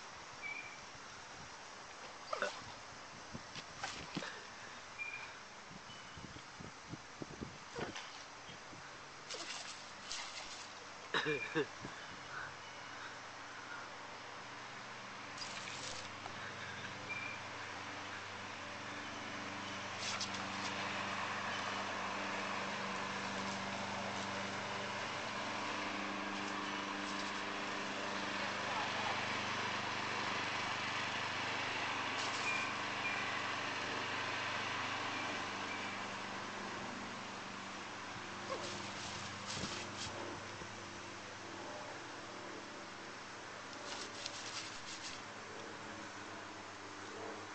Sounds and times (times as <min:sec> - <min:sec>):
Speech: 0:28.4 - 0:29.3.